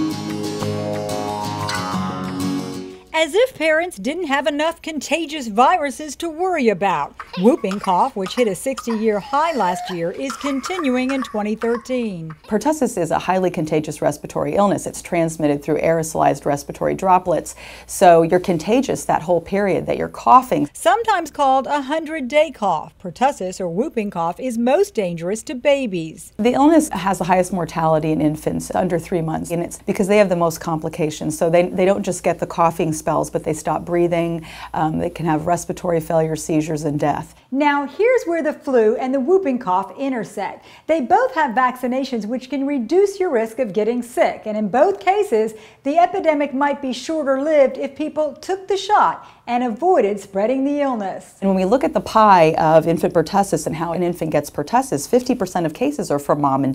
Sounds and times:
Speech: 3.2 - 56.7.

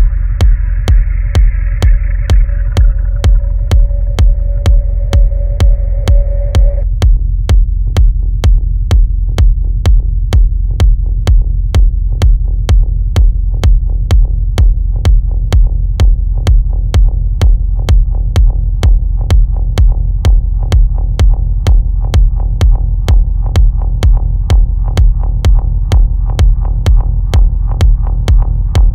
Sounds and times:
Music: 0.0 - 28.9.

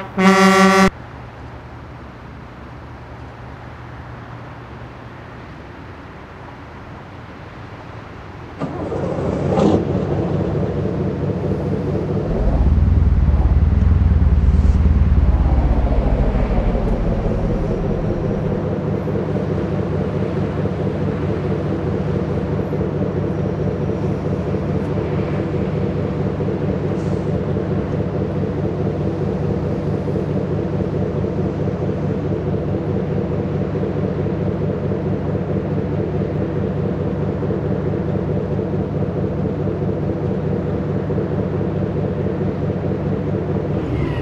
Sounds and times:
Truck: 0.0 - 44.2.

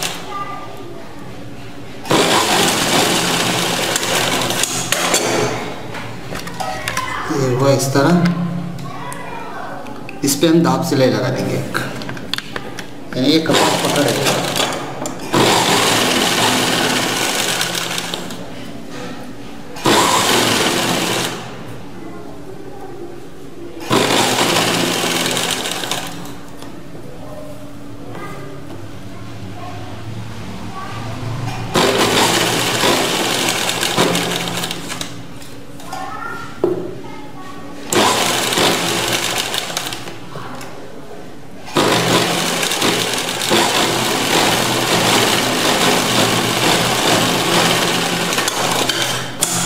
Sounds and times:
Sewing machine: 0.0 - 0.3, 2.0 - 5.6, 13.5 - 18.4, 19.8 - 21.6, 23.8 - 26.4, 31.7 - 35.2, 37.9 - 40.1, 41.7 - 49.6.

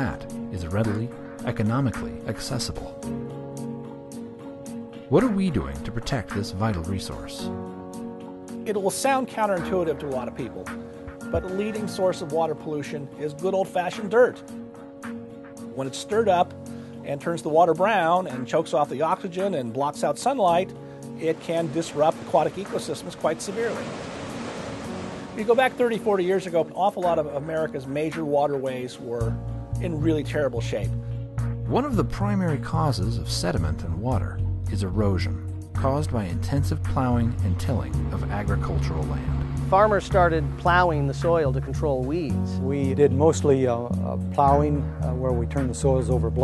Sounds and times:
Speech: 0.0 - 3.0, 5.1 - 7.5, 8.7 - 10.7, 11.4 - 14.4, 15.8 - 16.5, 17.1 - 23.8, 25.4 - 30.9, 31.7 - 46.4
Music: 0.0 - 46.4.

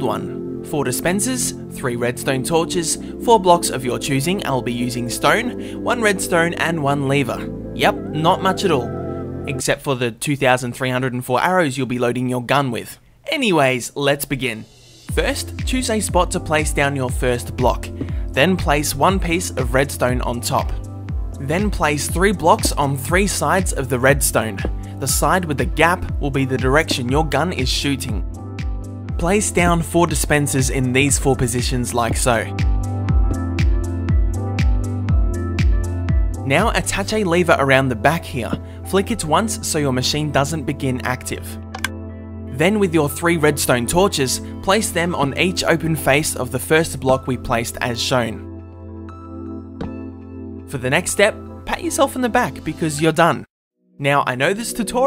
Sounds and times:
Music: 0.0 - 9.7, 14.2 - 55.0
Speech: 0.0 - 20.8, 21.4 - 28.2, 29.2 - 32.5, 36.4 - 41.6, 42.5 - 48.4, 50.7 - 55.0.

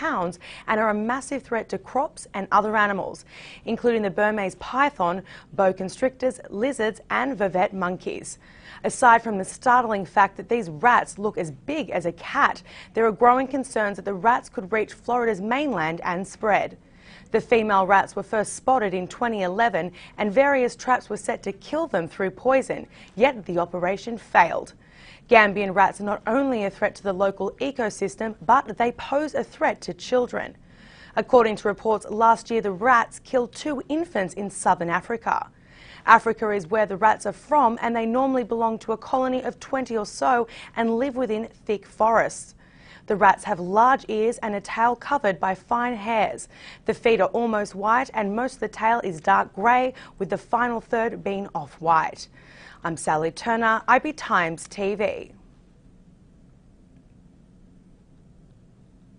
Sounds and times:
Speech: 0.0 - 30.6, 31.2 - 42.5, 43.1 - 55.4.

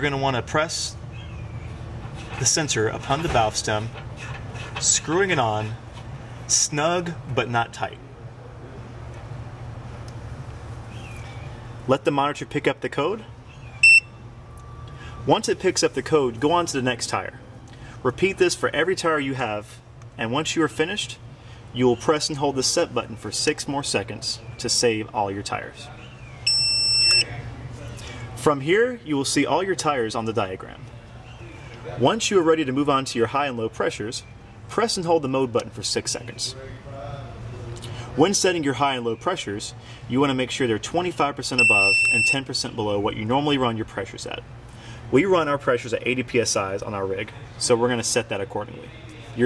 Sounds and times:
Speech: 0.0 - 1.0, 2.4 - 4.0, 4.8 - 5.8, 6.5 - 8.9, 11.9 - 13.3, 15.3 - 17.4, 18.0 - 21.2, 21.8 - 26.2, 27.2 - 37.5, 38.2 - 44.5, 45.1 - 49.4.

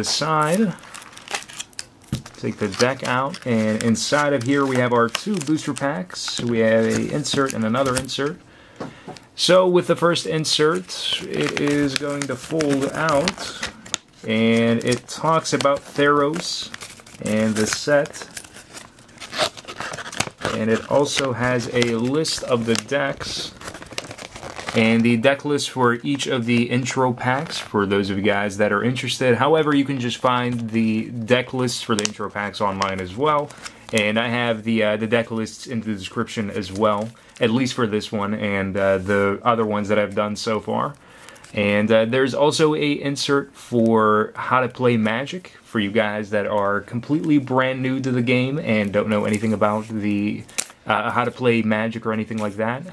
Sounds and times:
Speech: 0.0 - 0.8, 2.4 - 8.4, 9.4 - 18.3, 20.5 - 23.6, 24.7 - 41.0, 41.6 - 52.9
Crumpling, crinkling: 0.1 - 8.4, 10.1 - 27.8, 28.9 - 38.4, 39.8 - 41.7, 46.5 - 52.9.

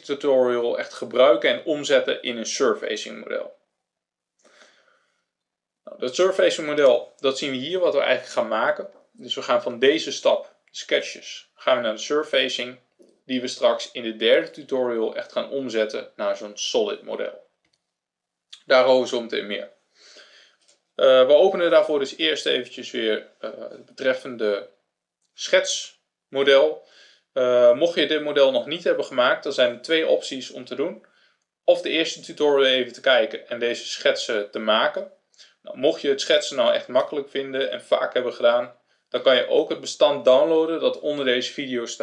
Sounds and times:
Speech: 0.0 - 3.6, 5.9 - 17.5, 18.6 - 19.8, 21.0 - 24.8, 25.4 - 31.1, 31.7 - 42.0.

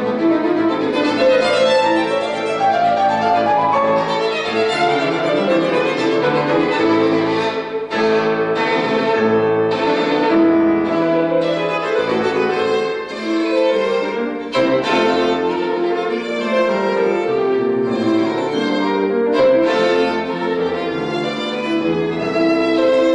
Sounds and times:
Violin, fiddle: 0.0 - 23.1.

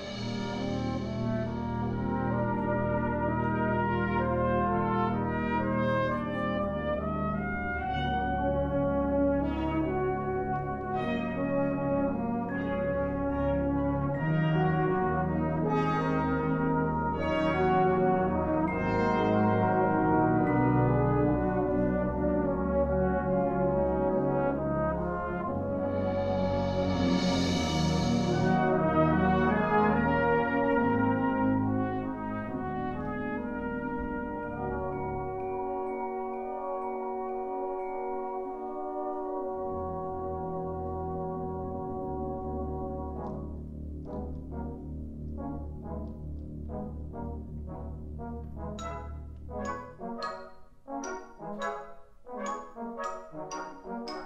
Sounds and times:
Classical music: 0.0 - 54.2
Orchestra: 0.0 - 54.2
Trombone: 0.0 - 54.2
Trumpet: 0.0 - 54.2.

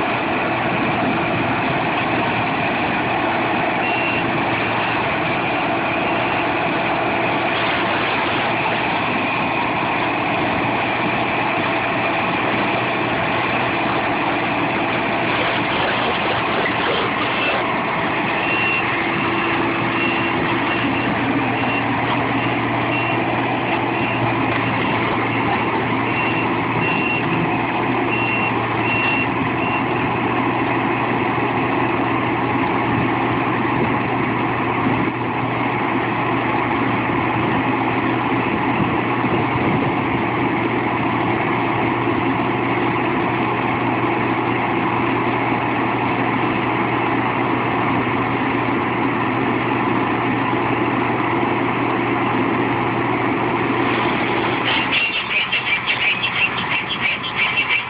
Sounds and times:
Vehicle: 0.0 - 57.9.

